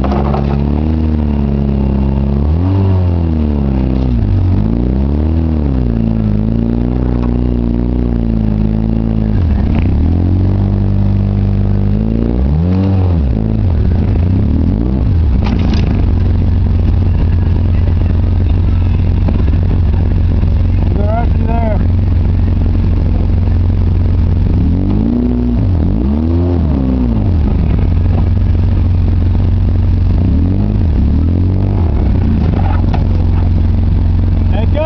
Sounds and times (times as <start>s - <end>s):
Car: 0.0s - 34.8s
Outside, rural or natural: 0.0s - 34.8s.